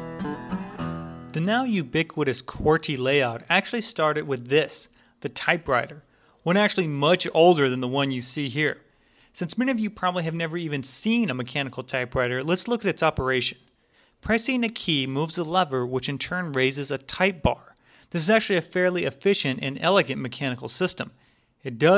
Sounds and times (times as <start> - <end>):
Speech: 1.3 - 21.9.